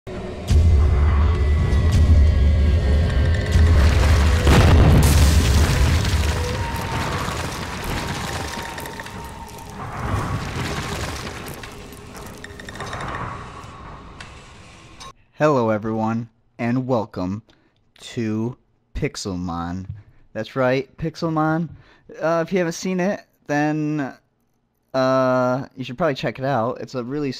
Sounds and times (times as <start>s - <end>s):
Music: 0.1s - 4.6s
Boom: 3.6s - 12.0s.